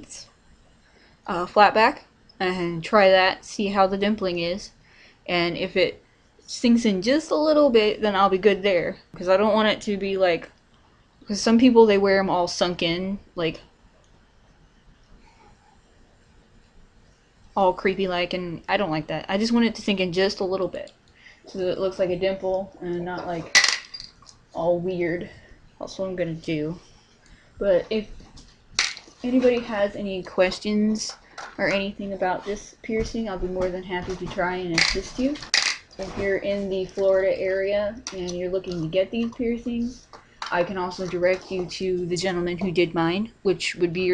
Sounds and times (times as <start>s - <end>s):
Inside, small room: 0.0s - 44.1s
Speech: 1.3s - 4.7s, 5.3s - 10.5s, 11.2s - 13.6s, 17.6s - 20.9s, 21.5s - 23.5s, 24.6s - 26.8s, 27.6s - 28.1s, 29.2s - 44.1s.